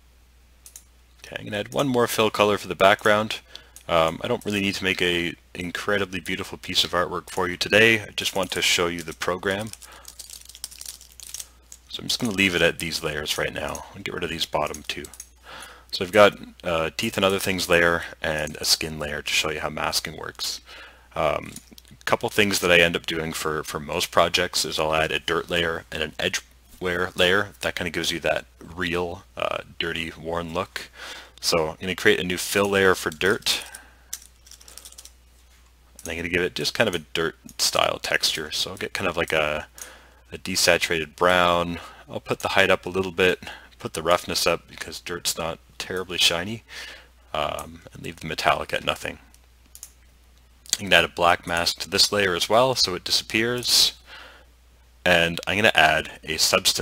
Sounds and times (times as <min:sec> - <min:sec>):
Speech: 0:01.2 - 0:09.8, 0:11.9 - 0:15.2, 0:15.9 - 0:33.8, 0:36.0 - 0:39.7, 0:40.3 - 0:46.7, 0:47.3 - 0:49.2, 0:50.7 - 0:54.1, 0:55.1 - 0:56.8.